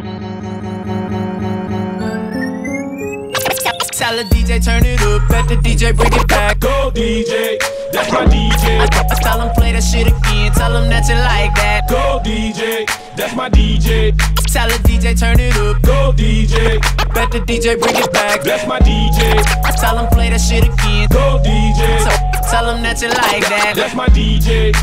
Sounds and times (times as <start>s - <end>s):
House music: 1.0s - 15.0s, 16.5s - 24.8s
Scratching (performance technique): 3.3s - 6.7s, 8.0s - 9.6s, 13.8s - 15.8s, 16.4s - 20.0s, 22.0s - 23.9s.